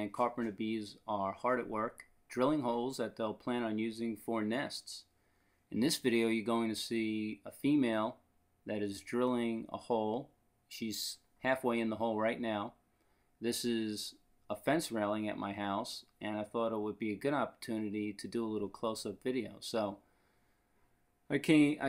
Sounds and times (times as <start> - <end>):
Speech: 0.0 - 5.1, 5.7 - 12.8, 13.4 - 20.0, 21.3 - 21.8.